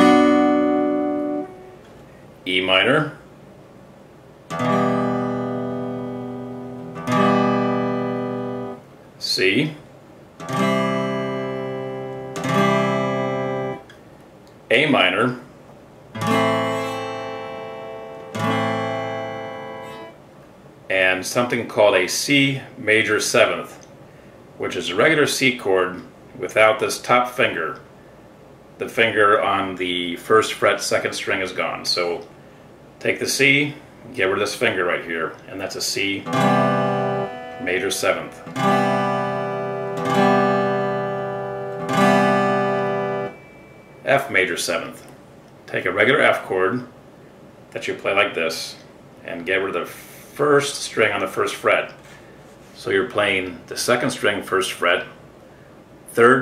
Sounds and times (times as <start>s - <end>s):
Acoustic guitar: 0.0s - 2.2s, 4.5s - 8.9s, 10.4s - 14.0s, 16.1s - 20.2s, 34.1s - 45.1s
Speech: 2.4s - 3.3s, 9.2s - 9.9s, 14.7s - 15.5s, 20.9s - 23.8s, 24.6s - 27.9s, 28.8s - 32.3s, 33.0s - 36.3s, 37.6s - 38.5s, 44.0s - 45.1s, 45.7s - 47.0s, 47.8s - 52.0s, 52.8s - 55.2s, 56.1s - 56.4s
Strum: 4.5s - 8.8s, 10.4s - 13.9s, 16.2s - 20.2s, 35.6s - 44.9s.